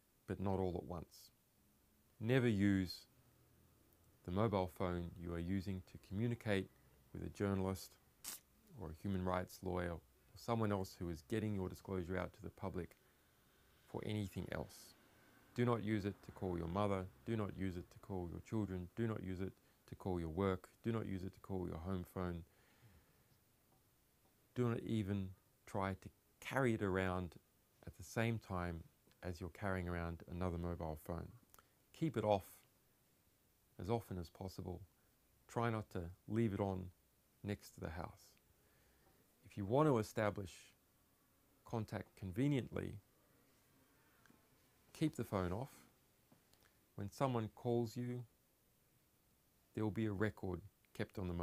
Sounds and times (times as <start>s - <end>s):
Speech: 0.3s - 1.4s, 2.2s - 3.1s, 4.2s - 8.0s, 8.7s - 13.0s, 13.9s - 15.0s, 15.6s - 22.5s, 24.5s - 32.7s, 33.8s - 34.9s, 35.5s - 38.4s, 39.4s - 40.8s, 41.6s - 43.0s, 44.9s - 45.9s, 47.0s - 48.3s, 49.7s - 51.4s.